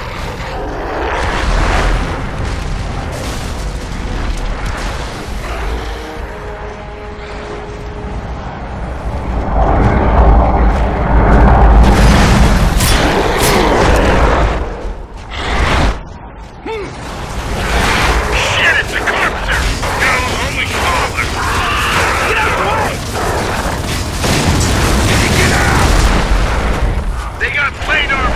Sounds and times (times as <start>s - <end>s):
Speech: 18.4s - 23.0s, 27.4s - 28.3s.